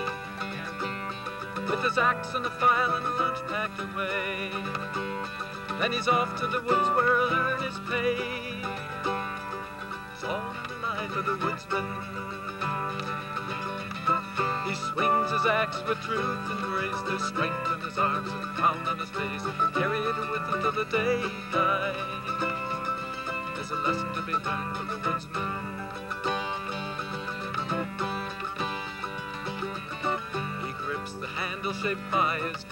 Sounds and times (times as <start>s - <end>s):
Music: 0.0s - 32.7s.